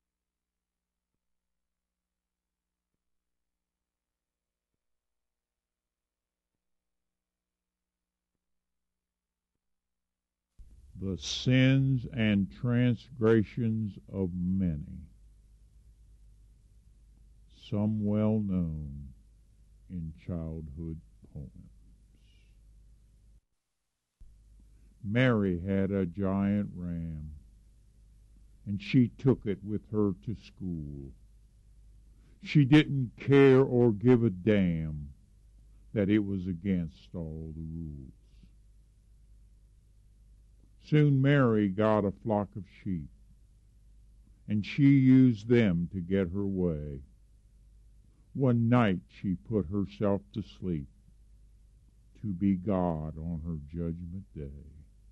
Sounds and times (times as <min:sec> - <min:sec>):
Speech: 0:11.0 - 0:15.2, 0:17.5 - 0:19.2, 0:19.9 - 0:21.7, 0:25.0 - 0:27.4, 0:28.7 - 0:31.2, 0:32.4 - 0:35.2, 0:36.0 - 0:38.4, 0:40.8 - 0:43.2, 0:44.5 - 0:47.1, 0:48.4 - 0:50.9, 0:52.2 - 0:54.9.